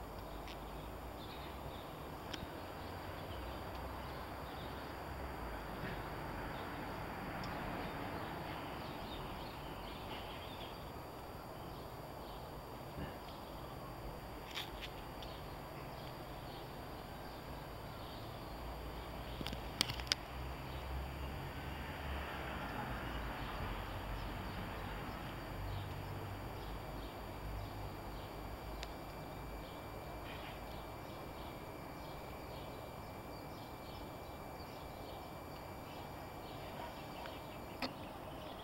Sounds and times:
Insect: 0.0s - 38.6s.

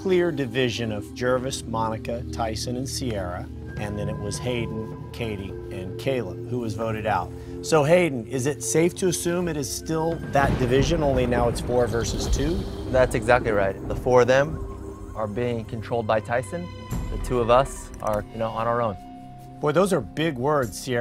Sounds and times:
Speech: 0.0s - 14.6s, 15.2s - 19.0s, 19.6s - 21.0s
Music: 0.0s - 21.0s.

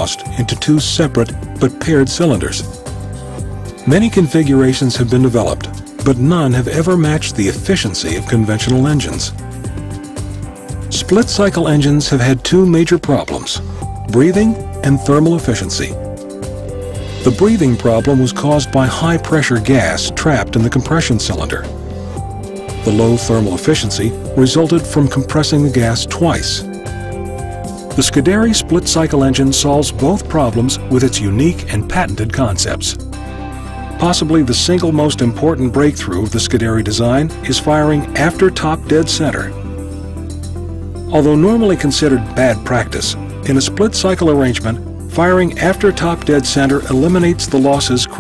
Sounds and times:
Speech: 0.0s - 2.8s, 3.8s - 9.4s, 10.9s - 16.0s, 17.2s - 21.8s, 22.8s - 26.7s, 28.0s - 33.0s, 34.0s - 39.6s, 41.1s - 48.2s
Music: 0.0s - 48.2s.

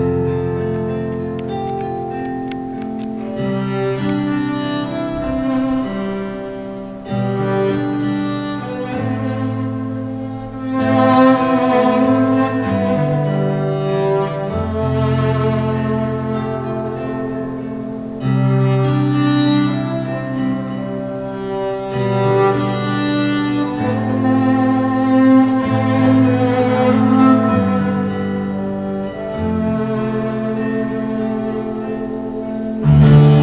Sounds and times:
Violin, fiddle: 0.0s - 33.4s.

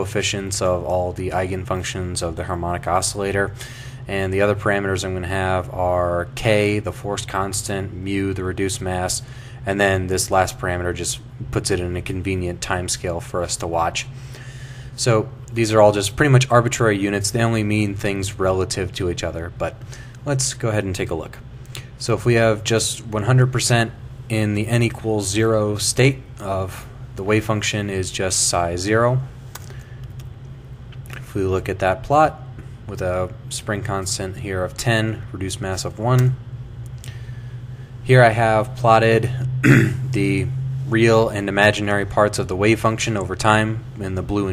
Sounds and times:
Speech: 0.0s - 14.1s, 15.0s - 21.4s, 22.0s - 29.3s, 31.2s - 36.4s, 38.1s - 44.5s.

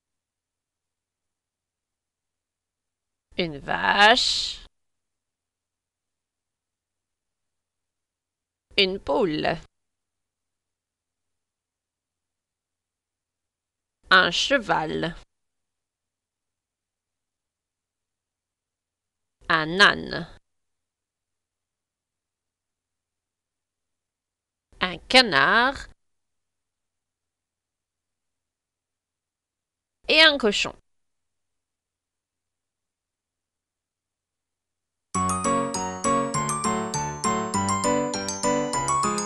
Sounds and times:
Speech: 3.4s - 4.7s, 8.7s - 9.7s, 14.0s - 15.3s, 19.4s - 20.4s, 24.8s - 26.0s, 30.1s - 30.8s.

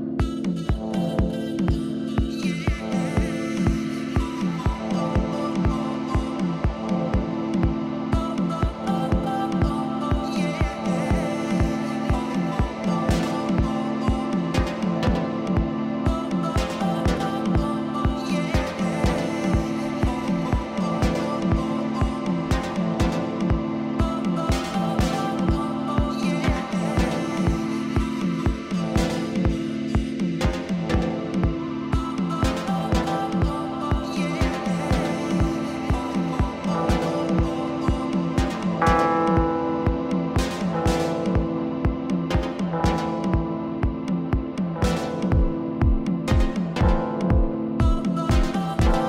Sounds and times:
Music: 0.0s - 49.0s.

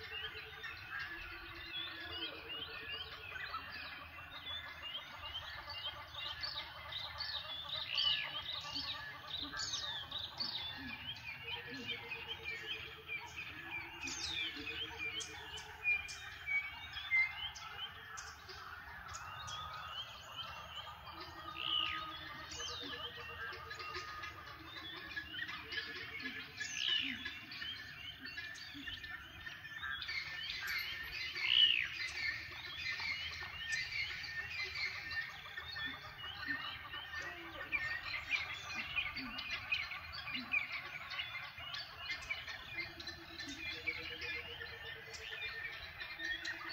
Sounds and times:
Chirp, tweet: 0.0s - 46.7s.

